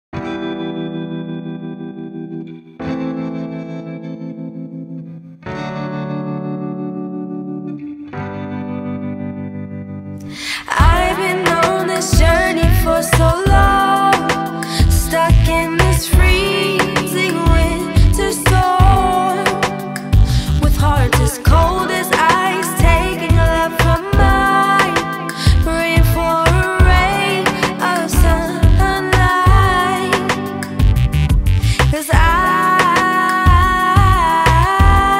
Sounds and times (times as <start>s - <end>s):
Music: 0.2s - 35.1s.